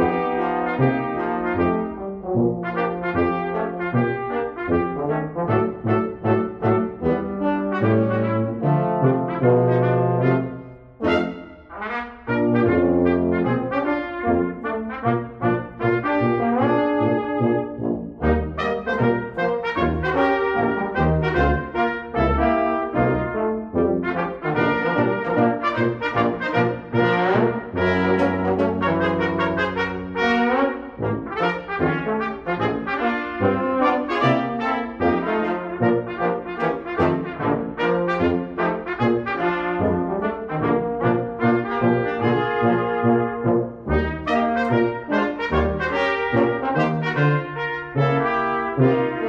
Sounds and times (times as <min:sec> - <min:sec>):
French horn: 0:00.0 - 0:49.2
Trombone: 0:00.0 - 0:49.2
Trumpet: 0:00.0 - 0:49.2.